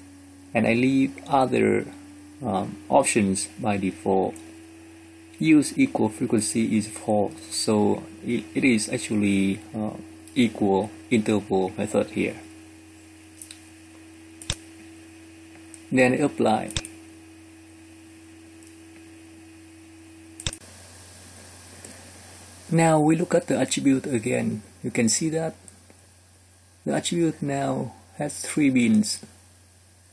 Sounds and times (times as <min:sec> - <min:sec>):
Speech: 0:00.6 - 0:04.4, 0:05.4 - 0:12.5, 0:15.9 - 0:16.8, 0:22.7 - 0:25.6, 0:26.8 - 0:29.3.